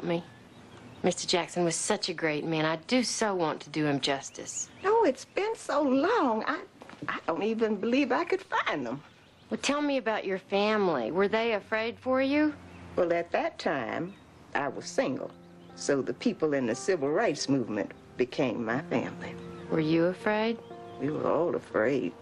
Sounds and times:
Speech: 0:00.0 - 0:00.3, 0:01.0 - 0:22.2
Music: 0:09.6 - 0:22.2.

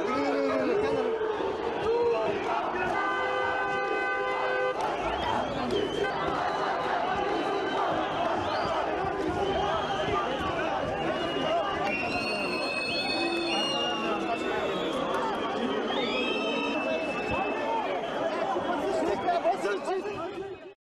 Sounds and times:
Speech: 0:00.0 - 0:04.1, 0:04.8 - 0:20.8.

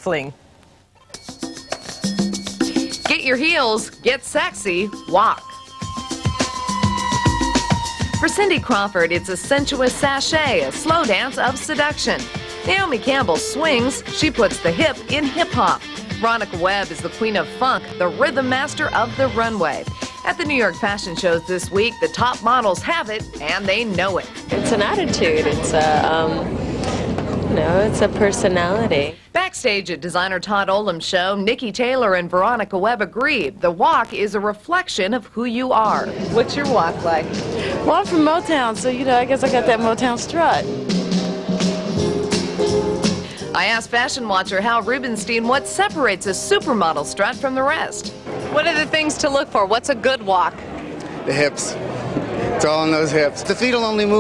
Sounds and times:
Music: 0:01.0 - 0:29.2, 0:35.7 - 0:50.4
Speech: 0:08.2 - 0:26.5.

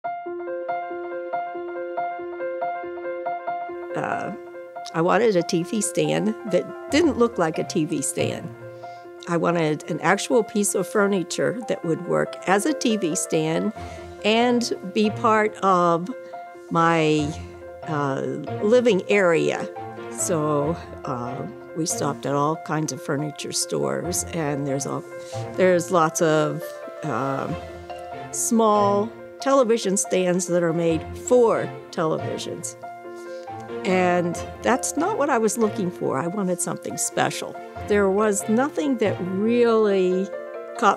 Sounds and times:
Music: 0:00.1 - 0:40.9
Speech: 0:04.0 - 0:08.5, 0:09.3 - 0:13.7, 0:14.3 - 0:16.1, 0:16.8 - 0:25.0, 0:25.6 - 0:27.6, 0:28.4 - 0:32.8, 0:33.9 - 0:40.9.

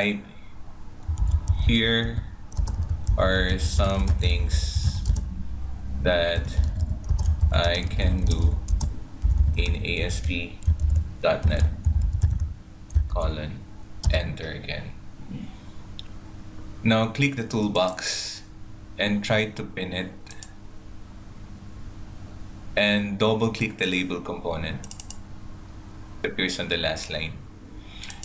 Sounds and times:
Speech: 0:00.0 - 0:00.3, 0:01.6 - 0:02.3, 0:03.2 - 0:05.0, 0:06.0 - 0:06.7, 0:07.5 - 0:08.6, 0:09.6 - 0:10.6, 0:11.2 - 0:11.8, 0:13.1 - 0:15.0, 0:16.8 - 0:20.4, 0:22.8 - 0:24.8, 0:26.2 - 0:27.4
Typing: 0:01.1 - 0:05.3, 0:06.4 - 0:13.1, 0:24.8 - 0:25.2.

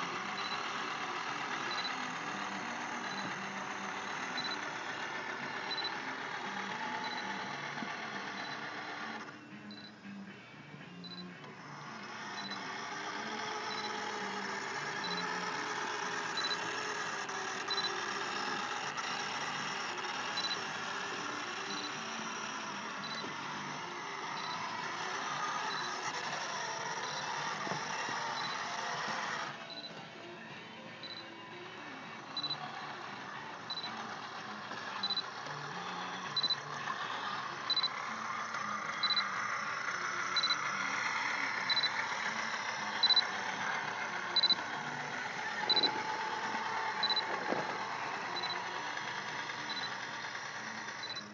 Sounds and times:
Vehicle: 0:00.0 - 0:51.3.

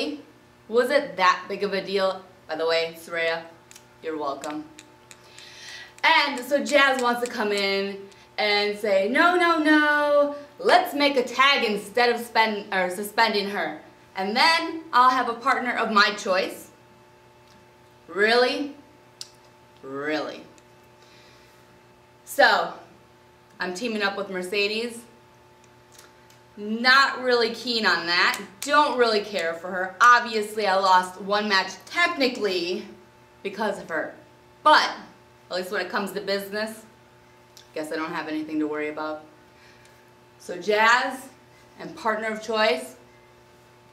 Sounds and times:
Speech: 0:00.0 - 0:04.8, 0:06.0 - 0:16.8, 0:18.1 - 0:18.8, 0:19.8 - 0:20.5, 0:22.3 - 0:22.9, 0:23.6 - 0:25.1, 0:26.6 - 0:36.9, 0:37.7 - 0:39.3, 0:40.4 - 0:43.0.

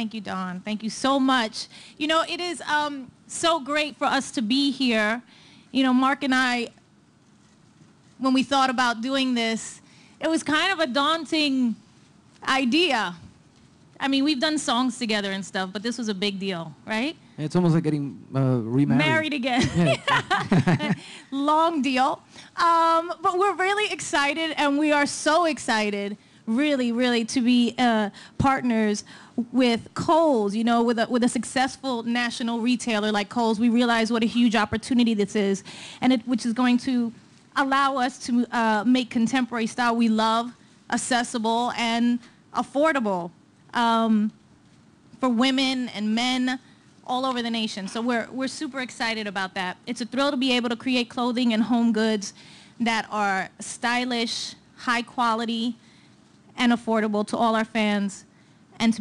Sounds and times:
Female speech, woman speaking: 0:00.0 - 0:05.2, 0:05.8 - 0:06.8, 0:08.2 - 0:11.8, 0:12.4 - 0:13.2, 0:14.0 - 0:17.2, 0:18.9 - 0:20.2, 0:21.3 - 0:44.4, 0:45.2 - 0:55.8, 0:56.6 - 0:59.0
Narration, monologue: 0:00.0 - 0:59.0.

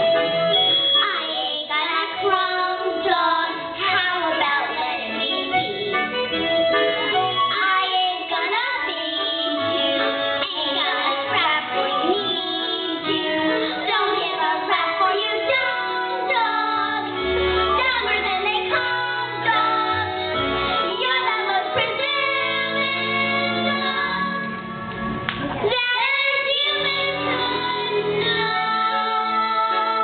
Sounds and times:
Music: 0:00.0 - 0:30.0.

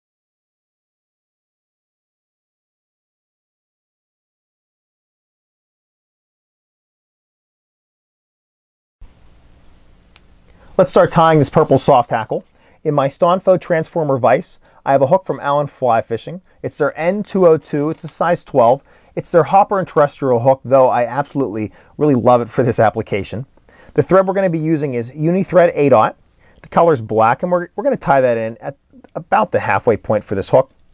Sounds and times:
Speech: 0:10.8 - 0:30.7.

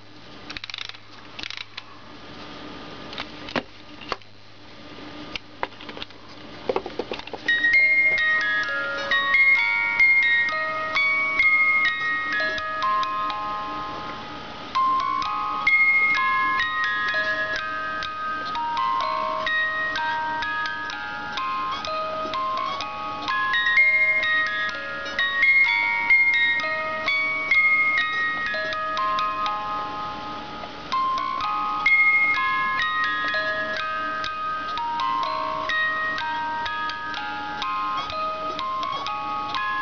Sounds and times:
Inside, small room: 0:00.0 - 0:39.8
Music: 0:07.5 - 0:39.8.

